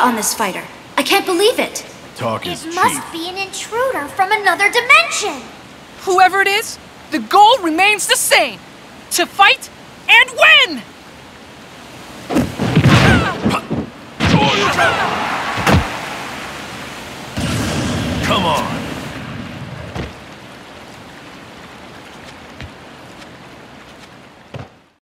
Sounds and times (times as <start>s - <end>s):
Whack, thwack: 12.3s - 14.7s, 15.6s - 15.9s.